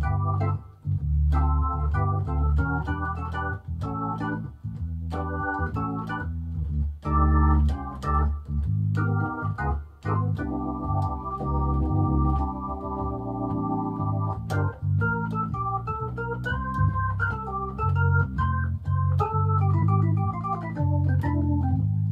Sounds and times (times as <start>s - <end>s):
Music: 0.0s - 22.1s.